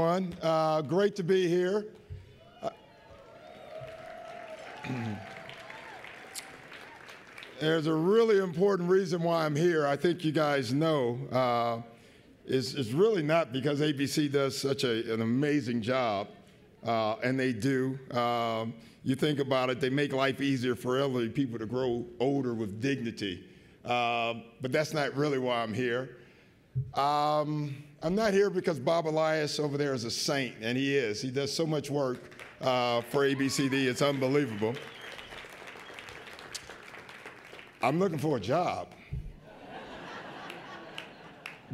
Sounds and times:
Male speech, man speaking: 0:00.0 - 0:01.9, 0:07.6 - 0:11.9, 0:12.5 - 0:26.1, 0:27.0 - 0:34.8, 0:37.8 - 0:38.9
Narration, monologue: 0:00.0 - 0:02.3, 0:07.5 - 0:34.9, 0:37.6 - 0:40.7.

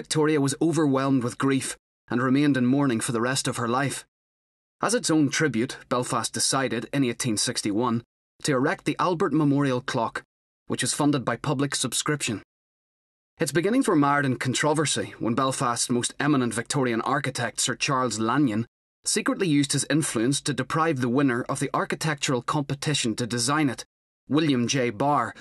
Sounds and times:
Speech: 0:00.0 - 0:04.1, 0:04.8 - 0:12.5, 0:13.4 - 0:25.4.

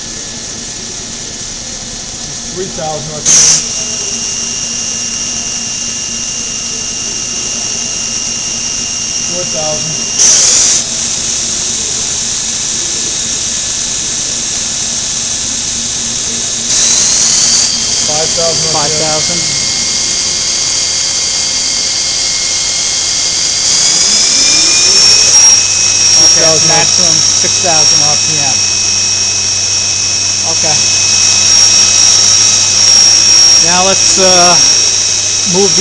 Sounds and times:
Speech: 0:02.3 - 0:03.3, 0:09.3 - 0:10.1, 0:18.1 - 0:19.6, 0:26.2 - 0:28.6, 0:30.4 - 0:30.8, 0:33.6 - 0:34.7, 0:35.5 - 0:35.8.

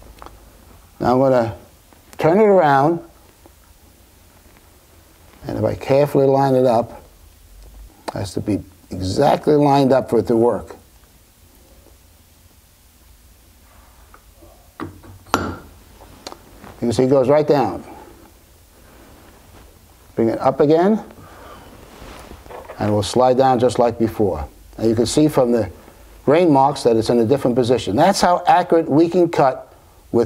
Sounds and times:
Speech: 0:01.0 - 0:03.2, 0:05.4 - 0:07.1, 0:08.1 - 0:10.9, 0:16.8 - 0:18.0, 0:20.2 - 0:21.2, 0:22.8 - 0:30.2.

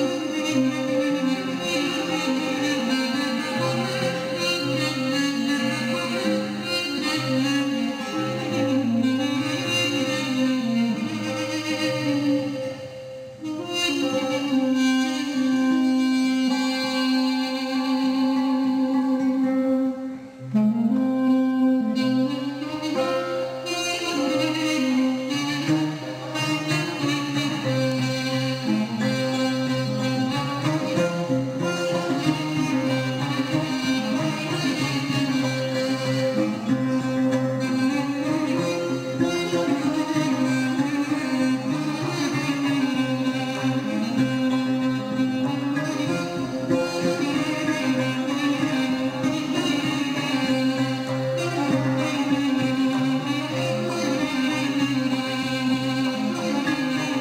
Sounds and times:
Musical instrument: 0:00.0 - 0:57.2.

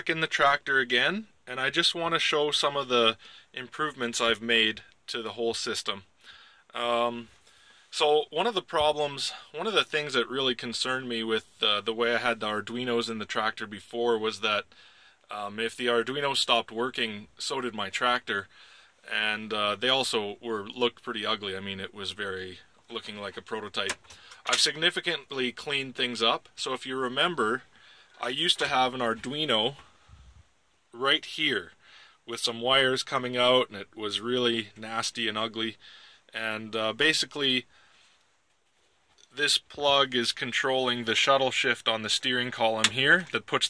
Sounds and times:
Speech: 0:00.0 - 0:06.1, 0:06.7 - 0:14.7, 0:15.3 - 0:29.9, 0:30.9 - 0:37.7, 0:39.2 - 0:43.6.

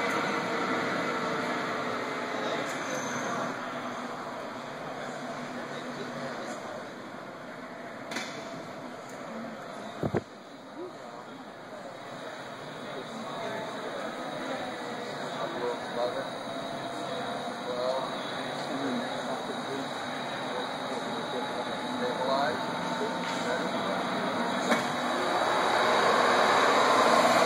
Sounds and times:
Speech: 0:04.8 - 0:07.0, 0:09.2 - 0:25.0.

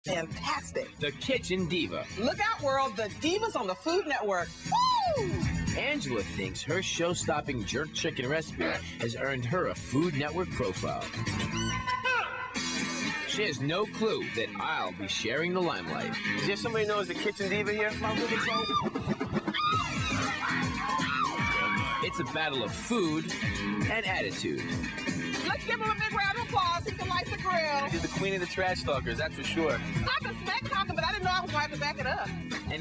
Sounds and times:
Music: 0:00.0 - 0:32.8.

